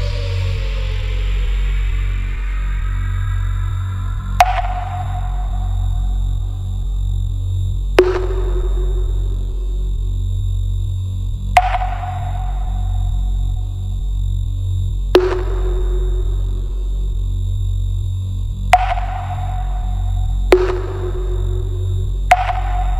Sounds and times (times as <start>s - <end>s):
Music: 0.0s - 22.9s
Sonar: 0.0s - 22.9s.